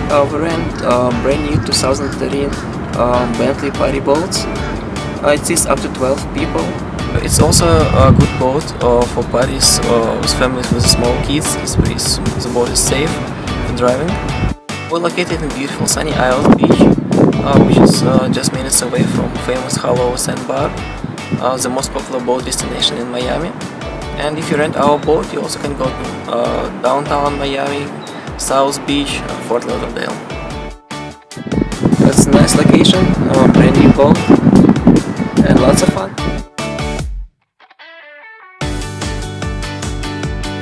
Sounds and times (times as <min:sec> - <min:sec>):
Speech: 0:00.0 - 0:04.5, 0:05.2 - 0:14.2, 0:14.9 - 0:20.8, 0:21.4 - 0:23.5, 0:24.2 - 0:30.2, 0:32.0 - 0:34.3, 0:35.4 - 0:36.2
Music: 0:00.0 - 0:40.6.